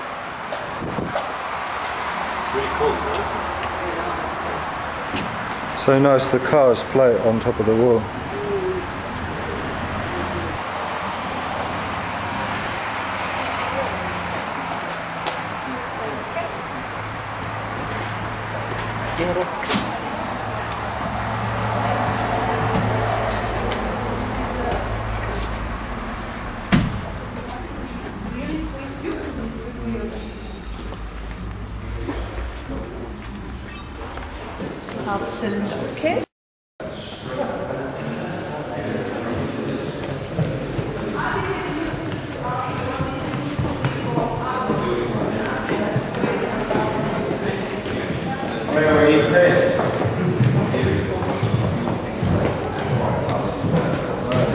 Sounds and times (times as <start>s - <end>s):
Inside, large room or hall: 0.0s - 54.5s.